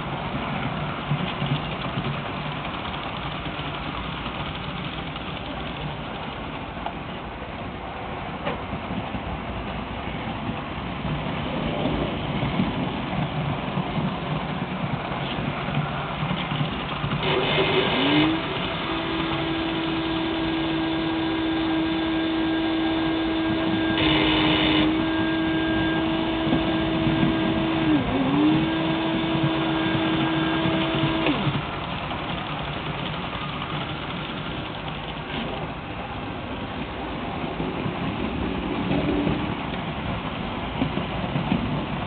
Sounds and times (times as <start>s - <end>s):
Vehicle: 0.0s - 42.0s.